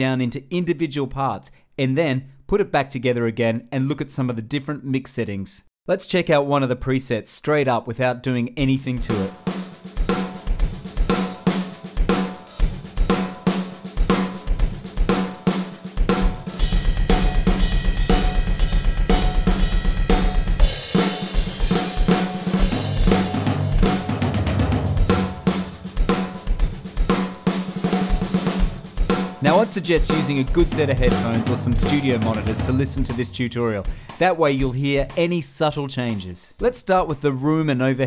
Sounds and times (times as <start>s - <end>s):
Speech: 0.0s - 9.4s, 29.4s - 38.0s
Drum kit: 8.6s - 37.4s
Drum: 9.0s - 37.3s.